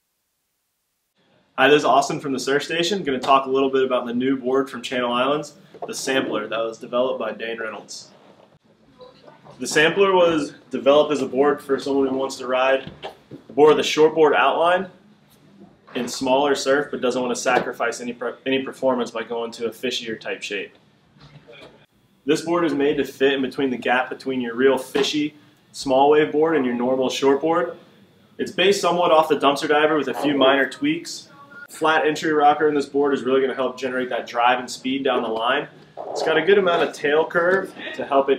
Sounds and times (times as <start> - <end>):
Speech: 1.6 - 8.2, 9.0 - 15.0, 15.9 - 20.8, 22.3 - 27.8, 28.4 - 38.3.